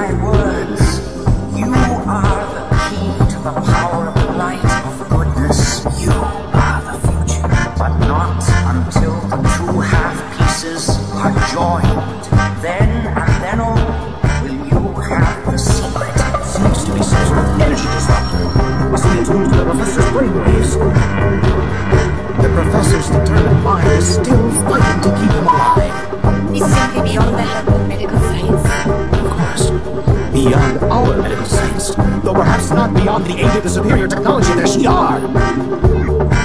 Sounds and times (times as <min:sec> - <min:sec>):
Speech: 0:00.0 - 0:18.3, 0:18.9 - 0:21.0, 0:22.4 - 0:36.2
Soundtrack music: 0:00.0 - 0:36.4.